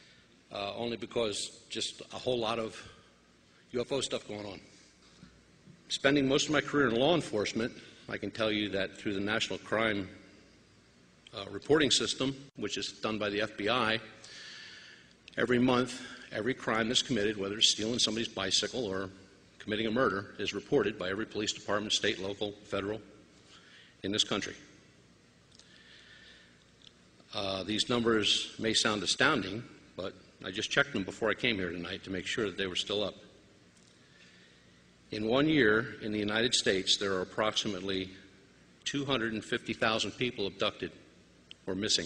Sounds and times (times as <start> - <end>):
Speech: 0.5 - 3.0, 3.7 - 4.7, 5.9 - 10.2, 11.3 - 14.2, 15.3 - 23.1, 24.0 - 24.7, 27.3 - 33.3, 35.1 - 41.0, 41.6 - 42.0.